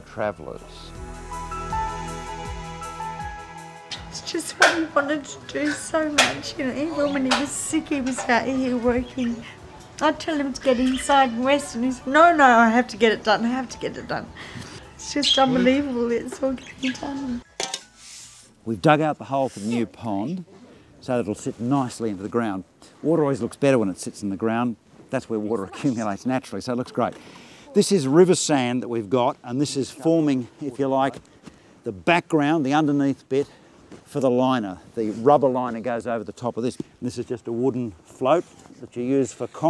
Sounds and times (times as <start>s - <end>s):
Outside, urban or manmade: 0.0s - 39.7s.